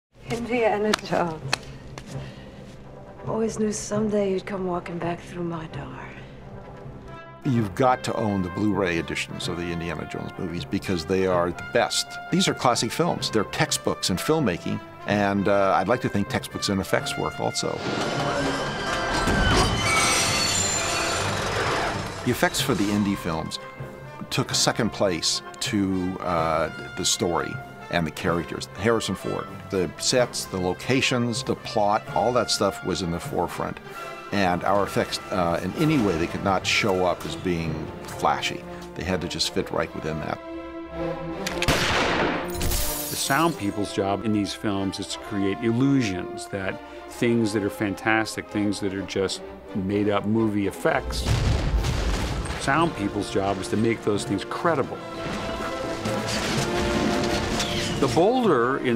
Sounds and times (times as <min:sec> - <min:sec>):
Music: 0:00.1 - 0:58.9
Speech: 0:07.5 - 0:17.8, 0:24.2 - 0:40.4, 0:43.2 - 0:51.3, 0:52.6 - 0:55.0, 0:58.0 - 0:58.9.